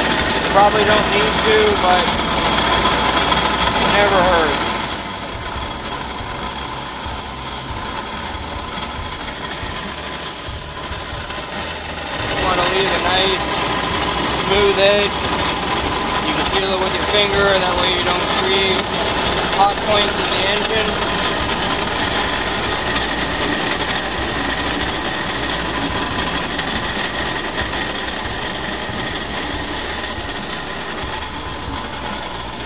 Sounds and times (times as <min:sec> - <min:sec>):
Engine: 0:00.0 - 0:32.6
Speech: 0:00.5 - 0:02.2, 0:03.8 - 0:04.7, 0:12.2 - 0:13.5, 0:14.4 - 0:15.2, 0:16.2 - 0:18.9, 0:19.5 - 0:21.0.